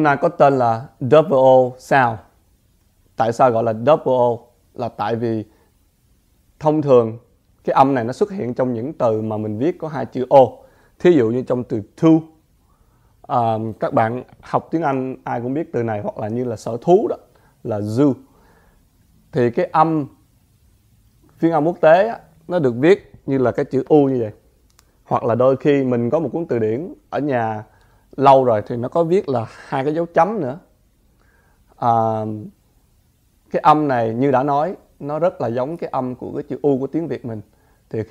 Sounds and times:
Speech: 0:00.0 - 0:02.4, 0:03.2 - 0:05.5, 0:06.6 - 0:12.4, 0:13.3 - 0:18.3, 0:19.3 - 0:20.2, 0:21.4 - 0:24.4, 0:25.0 - 0:30.7, 0:31.8 - 0:32.6, 0:33.5 - 0:38.1.

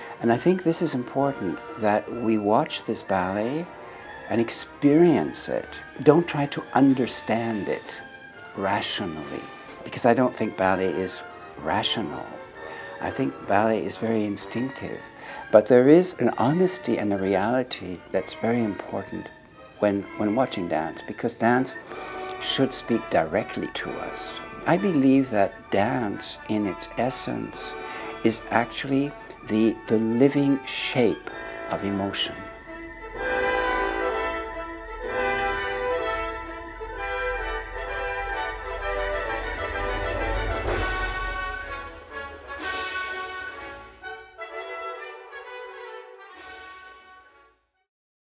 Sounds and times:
Music: 0:00.0 - 0:47.9
Speech: 0:00.2 - 0:03.7, 0:04.3 - 0:08.0, 0:08.6 - 0:12.4, 0:13.0 - 0:21.8, 0:22.4 - 0:32.5.

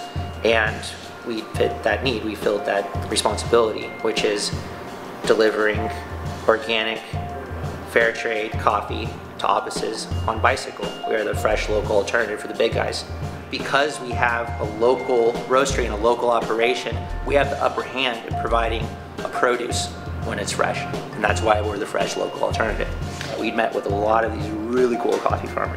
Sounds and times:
Music: 0:00.0 - 0:25.7
Speech: 0:00.4 - 0:04.6, 0:05.3 - 0:25.7.

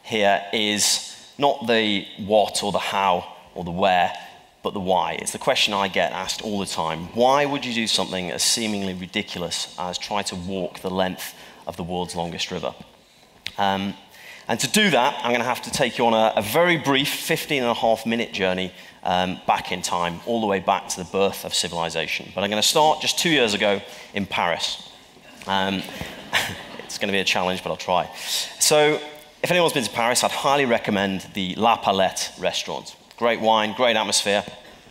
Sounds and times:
Speech: 0:00.0 - 0:12.9, 0:13.5 - 0:34.6.

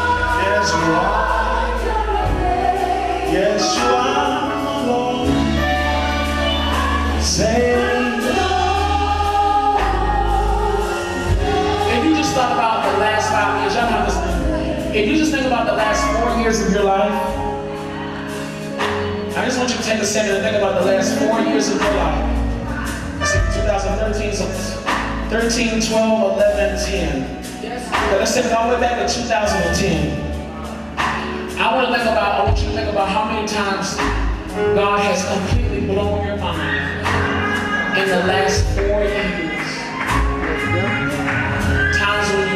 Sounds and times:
Singing: 0:00.0 - 0:19.9
Gospel music: 0:00.0 - 0:42.5.

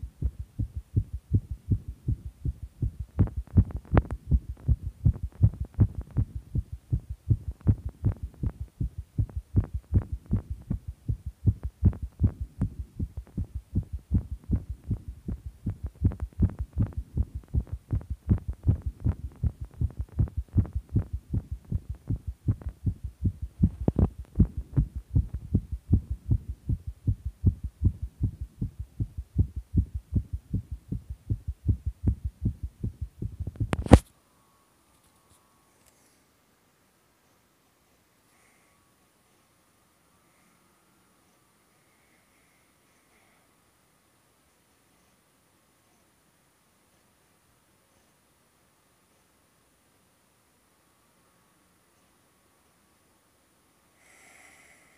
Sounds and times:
Heart sounds, heartbeat: 0:00.0 - 0:34.0.

